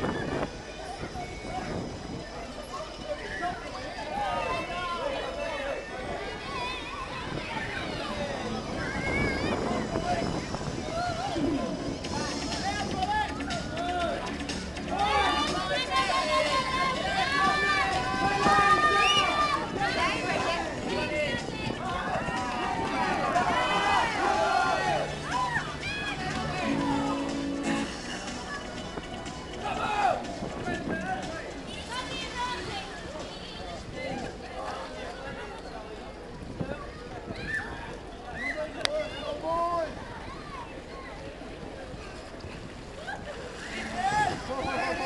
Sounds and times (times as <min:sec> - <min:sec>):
Speech: 0:00.7 - 0:27.3, 0:29.6 - 0:45.0
Music: 0:07.8 - 0:33.9.